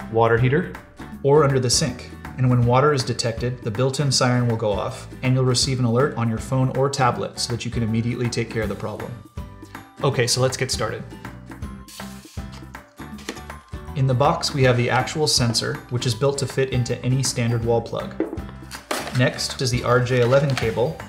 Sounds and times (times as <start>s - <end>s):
Music: 0.0s - 21.0s
Speech: 0.1s - 9.2s, 10.0s - 11.1s, 14.0s - 18.2s, 19.1s - 21.0s.